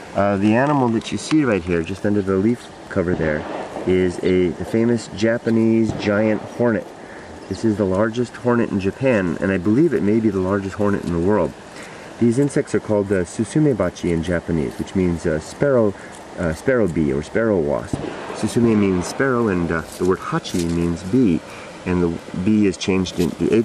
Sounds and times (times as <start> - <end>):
Speech: 0.2 - 6.9, 7.5 - 11.6, 12.2 - 23.6.